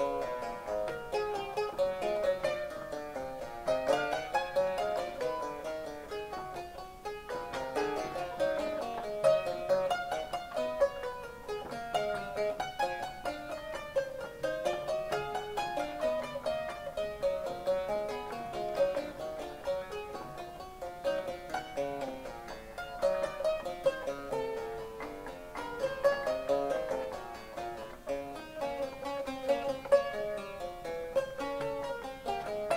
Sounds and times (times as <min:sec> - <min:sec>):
Harpsichord: 0:00.0 - 0:32.7
Inside, small room: 0:00.0 - 0:32.7.